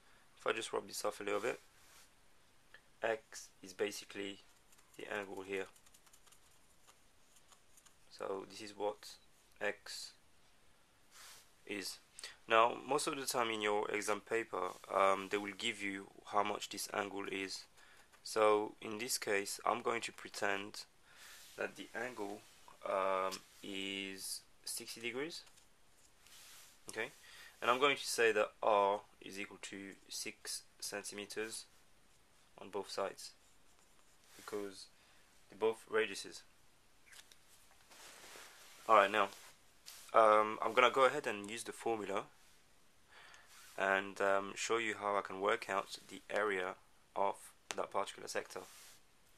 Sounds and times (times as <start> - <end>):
Speech: 0.4 - 1.6, 3.0 - 4.4, 5.0 - 5.8, 8.1 - 10.2, 11.6 - 20.9, 21.6 - 25.5, 26.9 - 31.7, 32.6 - 33.4, 34.4 - 34.9, 35.5 - 36.5, 38.9 - 39.4, 40.1 - 42.3, 43.8 - 48.7.